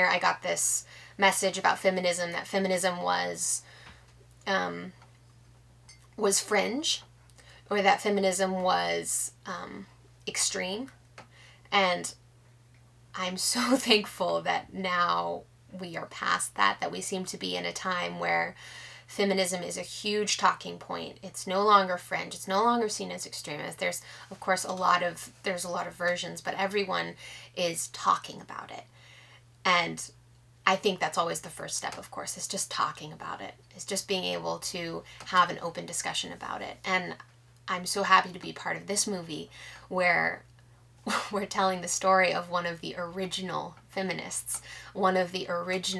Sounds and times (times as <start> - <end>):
Speech: 0.0 - 3.6, 4.5 - 5.0, 6.2 - 7.1, 7.7 - 11.0, 11.7 - 12.2, 13.2 - 28.9, 29.7 - 40.5, 41.1 - 45.9.